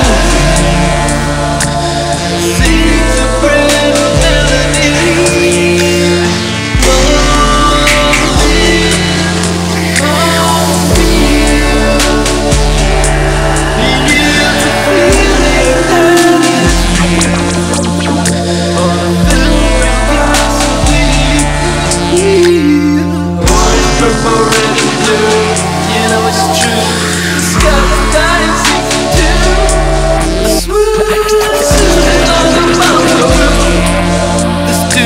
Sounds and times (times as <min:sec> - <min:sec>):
Music: 0:00.0 - 0:35.0.